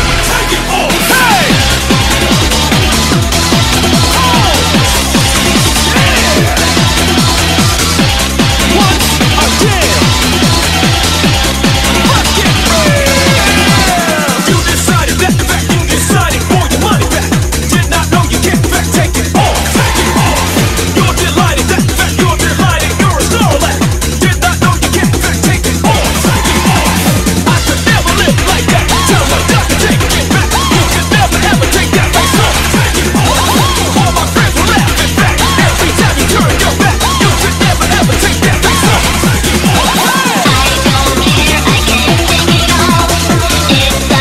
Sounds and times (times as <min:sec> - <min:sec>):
Techno: 0:00.0 - 0:44.2.